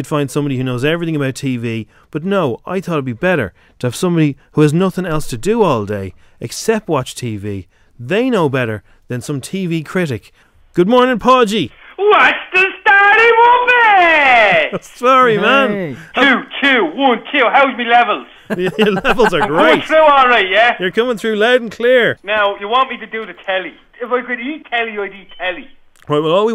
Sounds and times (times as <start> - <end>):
Speech: 0.0 - 26.5.